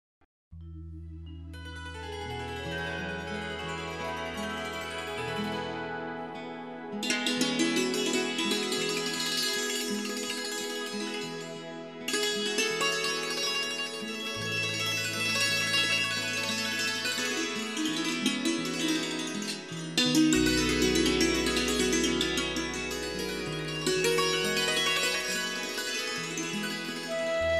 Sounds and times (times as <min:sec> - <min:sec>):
Music: 0:00.5 - 0:27.5.